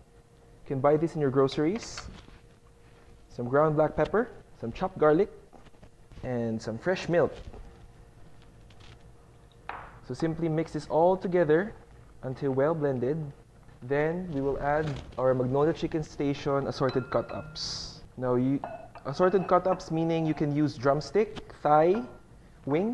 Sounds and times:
Speech: 0.7s - 2.1s, 3.3s - 5.4s, 6.2s - 7.4s, 10.0s - 22.9s.

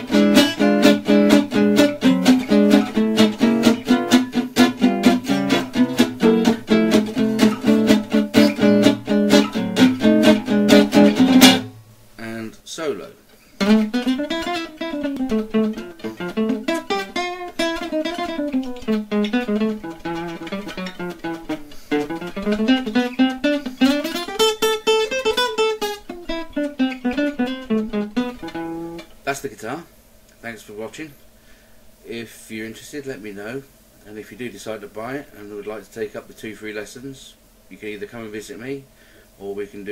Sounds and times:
Acoustic guitar: 0.0s - 12.5s, 13.2s - 29.4s
Strum: 0.0s - 12.6s, 13.4s - 29.6s
Speech: 12.2s - 13.2s, 29.2s - 31.2s, 32.0s - 39.9s.

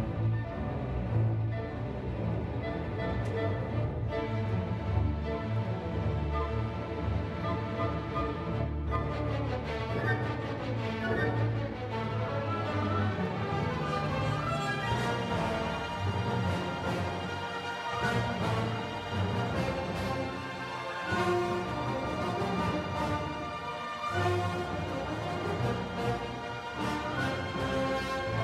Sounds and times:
Violin, fiddle: 0.0s - 28.4s.

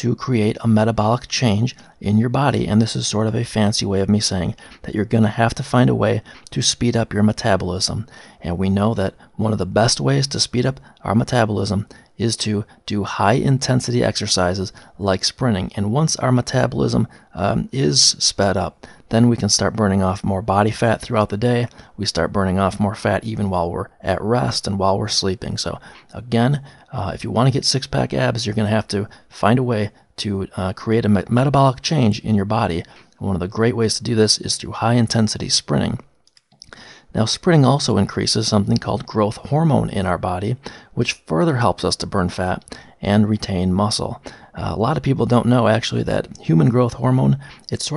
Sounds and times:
Speech: 0.0s - 36.1s, 37.1s - 47.9s.

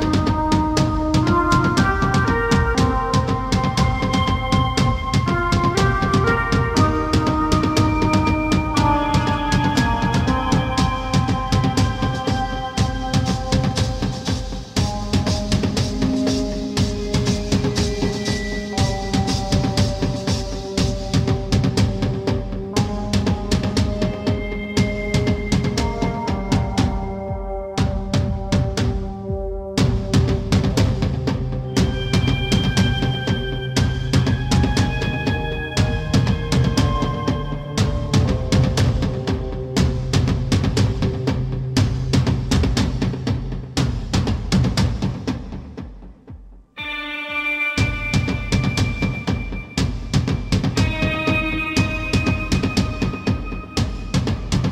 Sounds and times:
Music: 0.0s - 54.7s.

